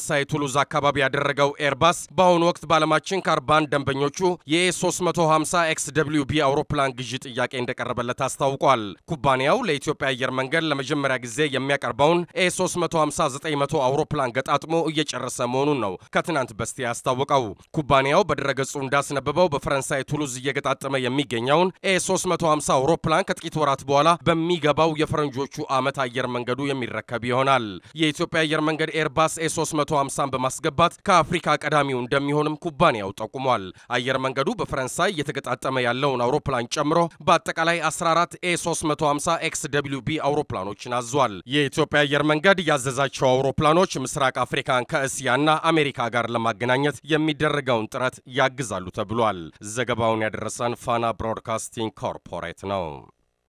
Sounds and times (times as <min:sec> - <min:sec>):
Speech: 0:00.0 - 0:53.1.